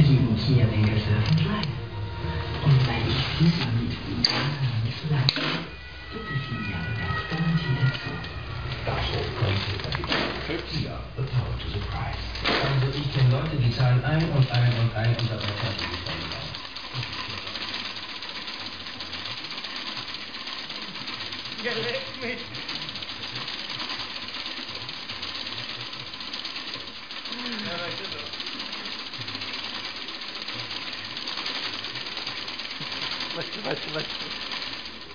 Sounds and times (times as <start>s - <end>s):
Bicycle: 0.0s - 35.1s
Speech: 8.8s - 16.5s, 27.3s - 28.3s, 33.3s - 34.3s.